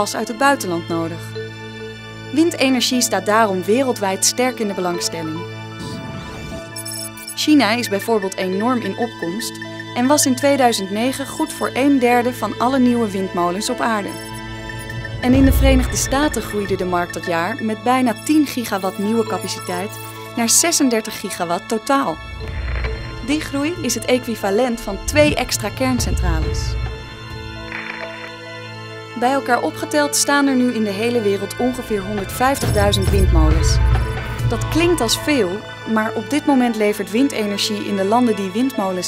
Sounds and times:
Speech: 0.0 - 1.3, 2.3 - 5.4, 7.4 - 14.3, 15.2 - 22.2, 23.3 - 26.8, 29.2 - 33.8, 34.5 - 39.0
Music: 0.0 - 39.0.

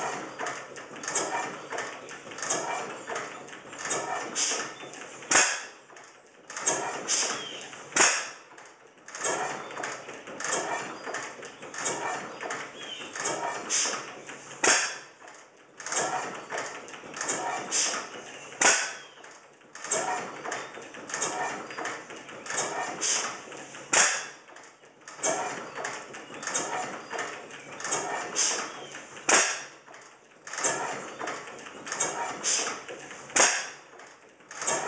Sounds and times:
Idling: 0.0 - 34.8
Medium engine (mid frequency): 0.0 - 34.8.

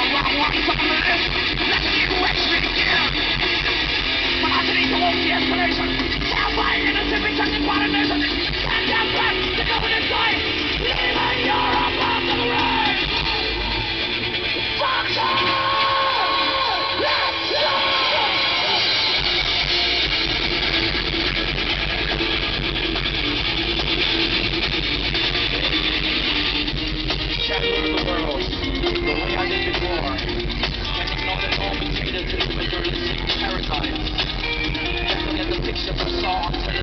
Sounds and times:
Speech: 0.0 - 3.2, 4.4 - 13.0, 27.4 - 30.3, 30.9 - 34.1, 35.0 - 36.8
Music: 0.0 - 36.8.

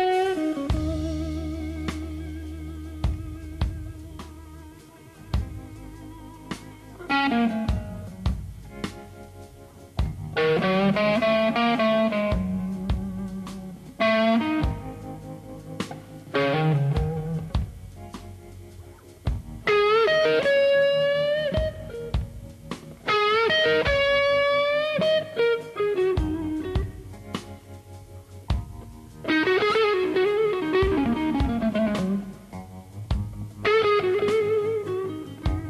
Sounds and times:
Electric guitar: 0.0 - 35.6.

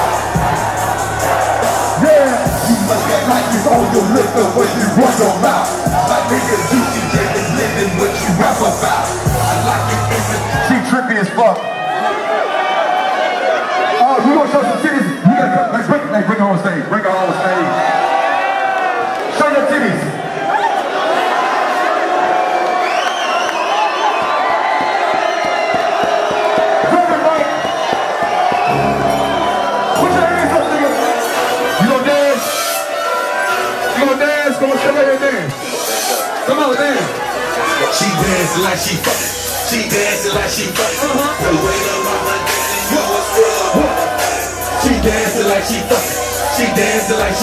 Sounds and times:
Cheering: 0.0 - 47.4
Crowd: 0.0 - 47.4.

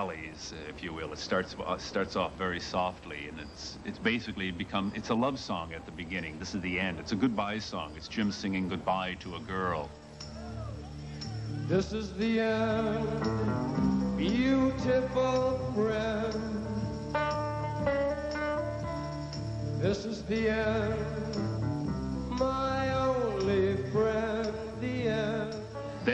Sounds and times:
Music: 8.1 - 26.1.

